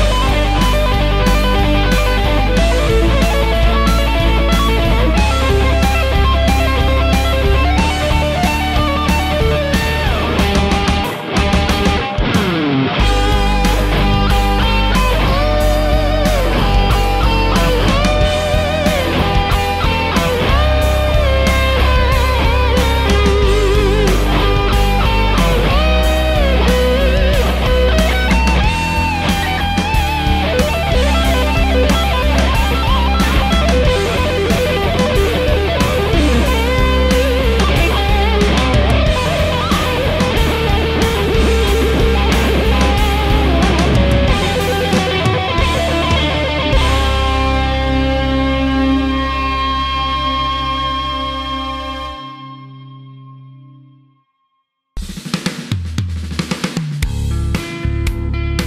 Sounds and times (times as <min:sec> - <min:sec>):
Heavy metal: 0:00.0 - 0:52.7
Electric guitar: 0:00.0 - 0:54.2, 0:57.0 - 0:58.6.